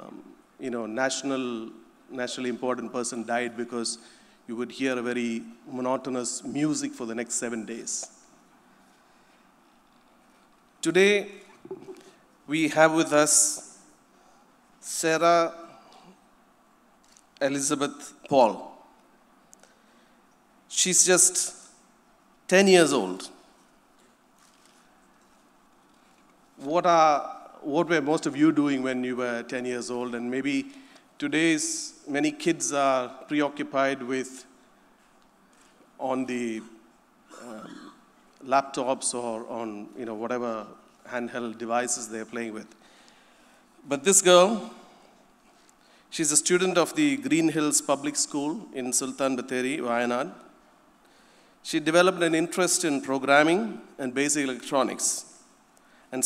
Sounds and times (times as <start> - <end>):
Speech: 0.0 - 8.1, 10.8 - 11.9, 12.5 - 13.8, 14.8 - 15.7, 17.4 - 18.8, 20.7 - 21.6, 22.5 - 23.4, 26.6 - 34.5, 36.0 - 36.8, 38.4 - 42.7, 43.9 - 44.8, 46.2 - 50.5, 51.7 - 55.3.